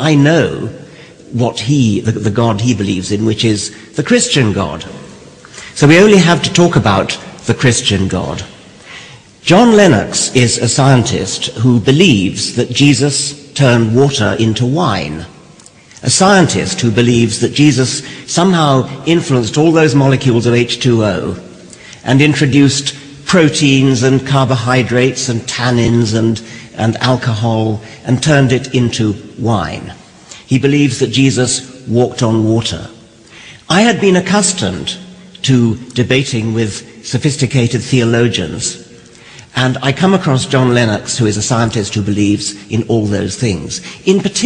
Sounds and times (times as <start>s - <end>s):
Speech: 0.0s - 8.6s, 9.4s - 15.4s, 16.0s - 33.0s, 33.6s - 44.4s.